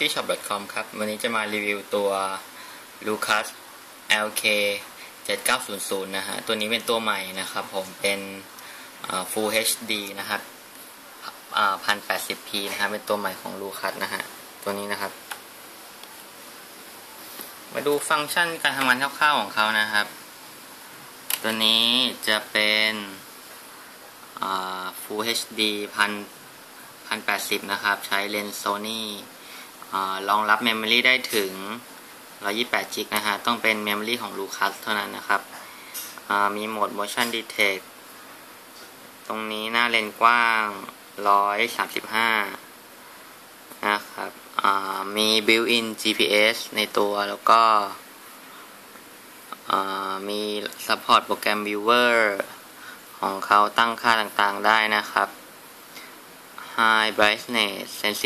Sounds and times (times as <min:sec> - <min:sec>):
Speech: 0:00.0 - 0:10.5, 0:11.2 - 0:15.2, 0:17.7 - 0:20.2, 0:21.3 - 0:23.3, 0:24.4 - 0:26.4, 0:27.1 - 0:29.3, 0:29.9 - 0:35.6, 0:36.2 - 0:37.8, 0:39.3 - 0:42.7, 0:43.8 - 0:48.0, 0:49.5 - 0:52.6, 0:53.2 - 0:55.4, 0:56.6 - 0:58.2.